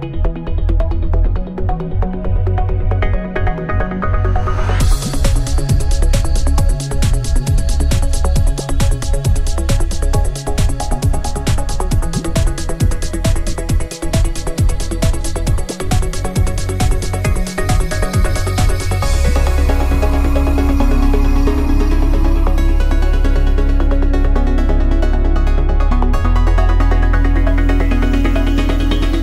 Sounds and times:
Music: 0.0s - 29.2s.

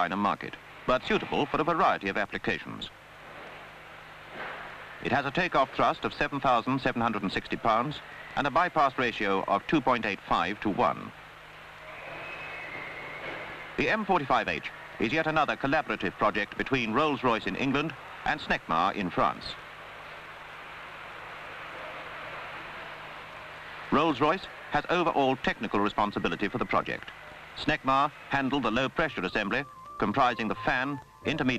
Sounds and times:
Speech: 0.0s - 2.9s, 5.0s - 11.2s, 13.8s - 19.6s, 23.9s - 31.5s.

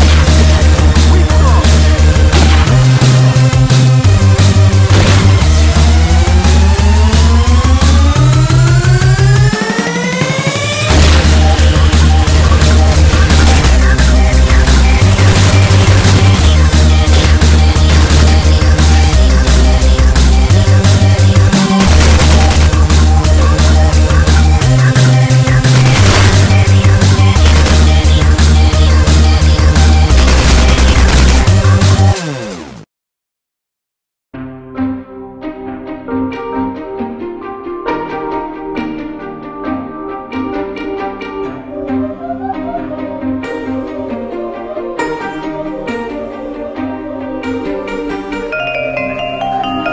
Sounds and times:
String section: 34.6s - 49.9s.

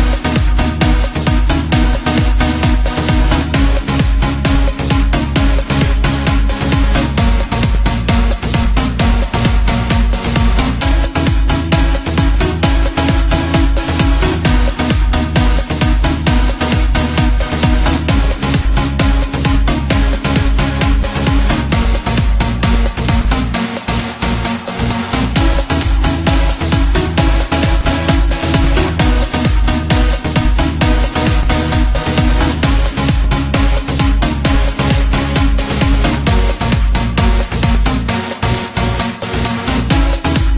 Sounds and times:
Electronica: 0.0s - 40.5s.

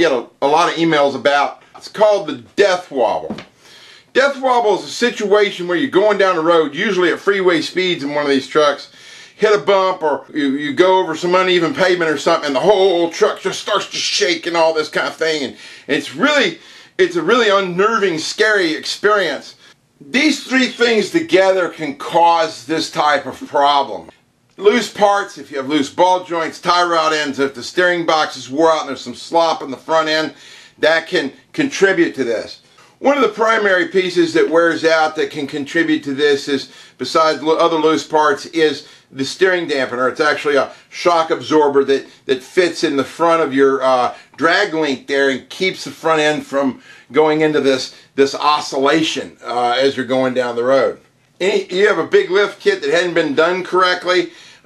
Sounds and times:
Speech: 0.0s - 3.5s, 4.1s - 54.6s.

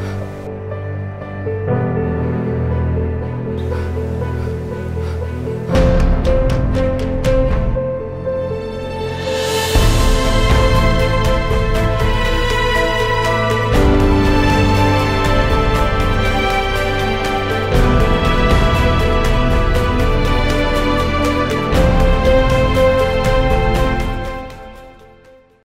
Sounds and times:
Music: 0.0s - 25.6s.

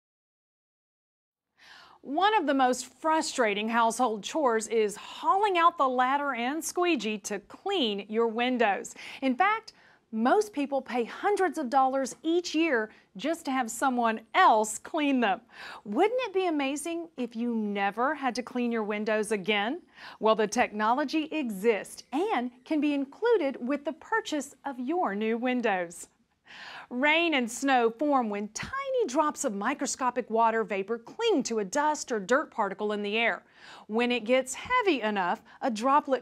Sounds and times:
Speech: 2.0s - 26.1s, 26.9s - 36.2s.

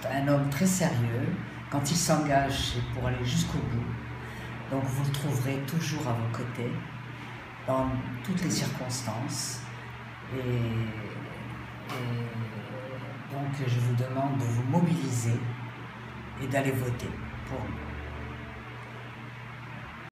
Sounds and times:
Speech: 0.0s - 4.1s, 4.7s - 7.0s, 7.7s - 9.7s, 10.3s - 15.6s, 16.4s - 17.9s
Music: 14.6s - 20.1s.

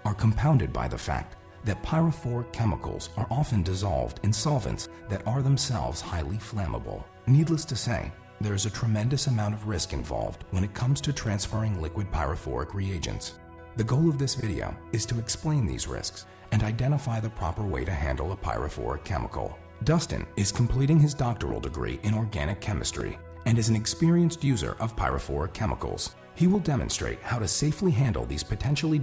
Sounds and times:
Music: 0.0s - 29.0s
Speech: 0.0s - 29.0s.

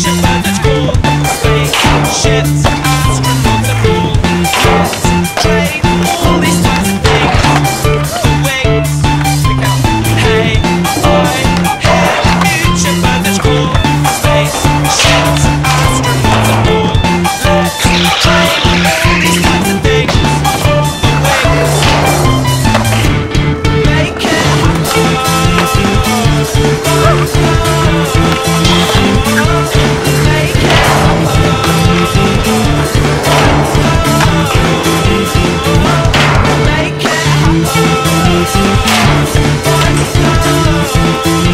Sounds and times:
Skateboard: 11.0s - 17.0s.

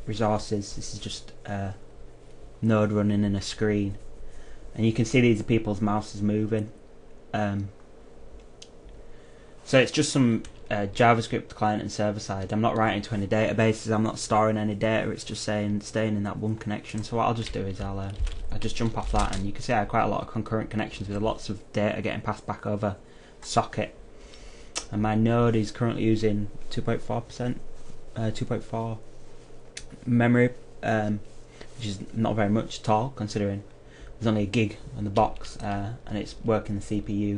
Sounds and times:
Speech: 0.0s - 1.8s, 2.6s - 4.1s, 4.7s - 7.8s, 9.7s - 24.0s, 24.8s - 29.1s, 29.8s - 37.3s.

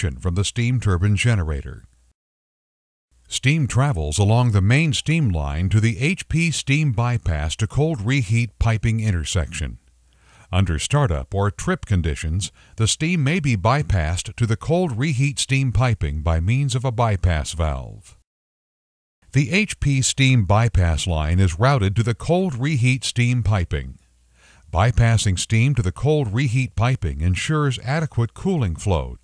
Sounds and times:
Speech: 0.0s - 1.9s, 3.3s - 9.8s, 10.5s - 18.2s, 19.3s - 24.0s, 24.7s - 29.2s.

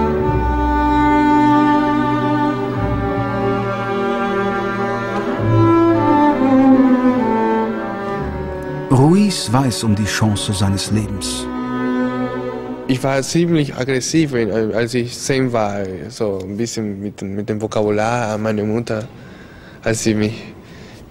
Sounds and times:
Double bass: 0.0s - 13.4s
Violin, fiddle: 0.0s - 13.8s
Cello: 0.0s - 16.9s.

